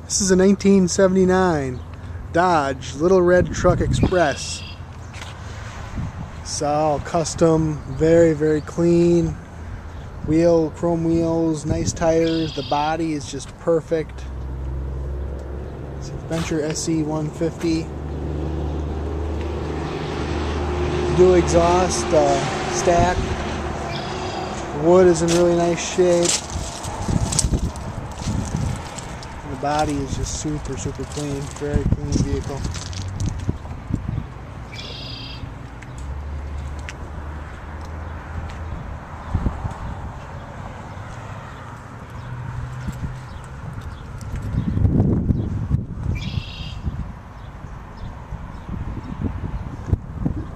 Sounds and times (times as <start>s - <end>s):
Speech: 0.1s - 4.6s, 6.4s - 9.4s, 10.3s - 14.3s, 16.0s - 17.9s, 21.1s - 23.3s, 24.8s - 26.4s, 29.4s - 32.8s.